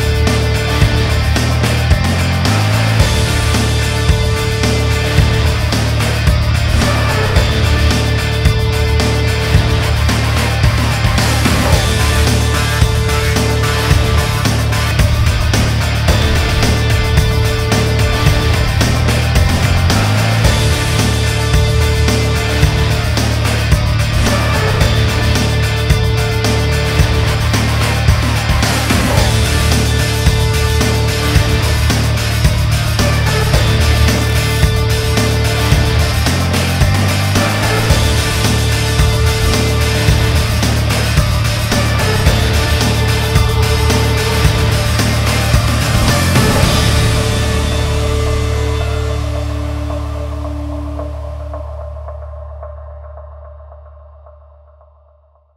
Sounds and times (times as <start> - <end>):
Music: 0.0 - 55.5.